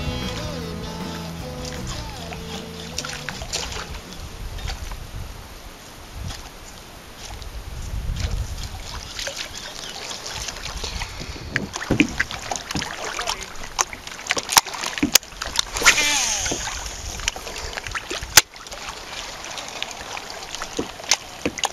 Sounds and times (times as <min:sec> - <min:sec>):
Rowboat, canoe, kayak: 0:00.4 - 0:21.7.